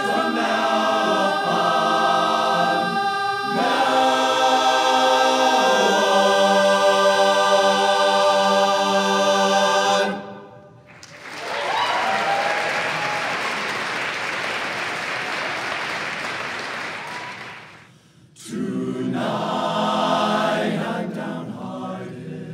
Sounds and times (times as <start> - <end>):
Choir: 0.0 - 10.9, 17.1 - 22.5
Applause: 10.9 - 17.9.